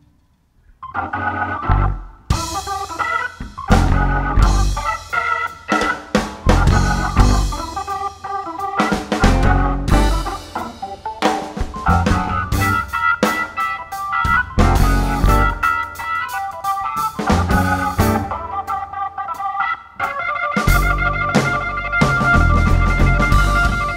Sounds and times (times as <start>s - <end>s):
Electronic organ: 0.8s - 23.9s
Piano: 0.9s - 18.9s, 20.1s - 23.9s
Drum: 2.3s - 8.0s, 8.8s - 16.1s, 17.0s - 18.4s, 20.6s - 23.9s.